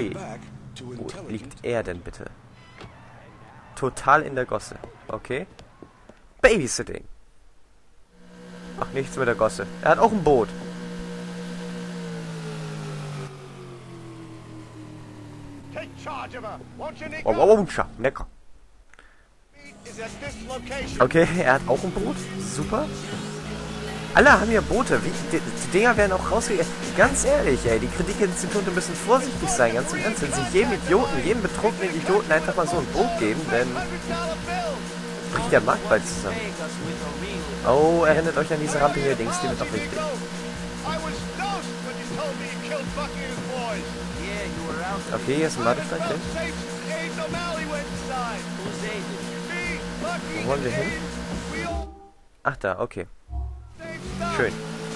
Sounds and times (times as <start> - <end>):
Speech: 0.0 - 2.3, 3.8 - 5.5, 6.4 - 7.1, 8.8 - 10.5, 15.8 - 18.3, 19.6 - 23.2, 24.2 - 40.2, 40.8 - 51.9, 52.5 - 53.1, 53.8 - 54.6.